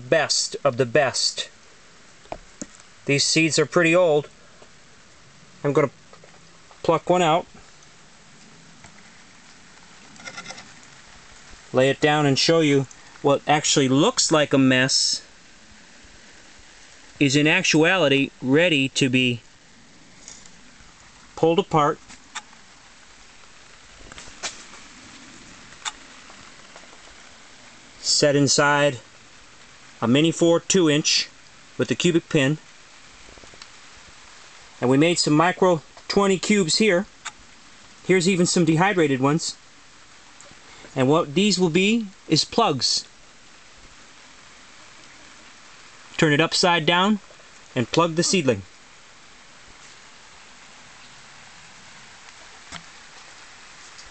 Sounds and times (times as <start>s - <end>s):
Speech: 0.0s - 1.6s, 3.0s - 4.3s, 5.6s - 5.9s, 6.8s - 7.5s, 11.7s - 15.3s, 17.2s - 19.4s, 21.4s - 22.0s, 28.0s - 29.0s, 30.0s - 32.6s, 34.8s - 37.1s, 38.1s - 39.6s, 40.9s - 43.1s, 46.2s - 47.2s, 47.8s - 48.7s
Outside, urban or manmade: 0.0s - 54.1s.